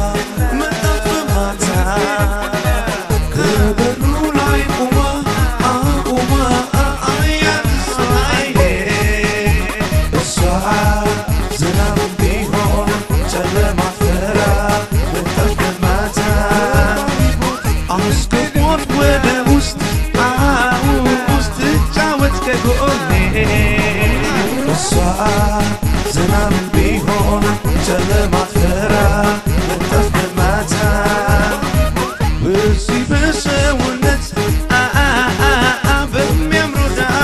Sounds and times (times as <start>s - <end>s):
Dance music: 0.0s - 37.2s.